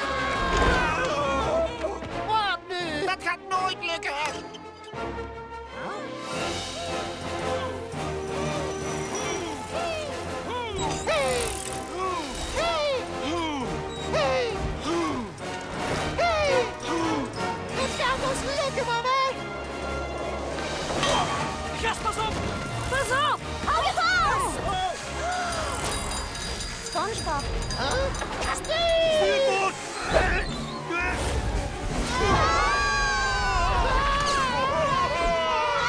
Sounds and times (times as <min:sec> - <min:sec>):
Music: 0:00.0 - 0:35.8
Bicycle: 0:10.8 - 0:12.9, 0:25.2 - 0:28.3.